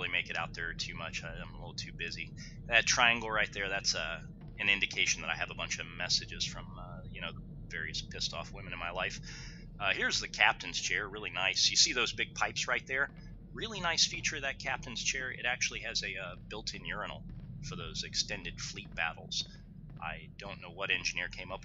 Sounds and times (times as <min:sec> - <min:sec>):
Speech: 0:00.0 - 0:21.6.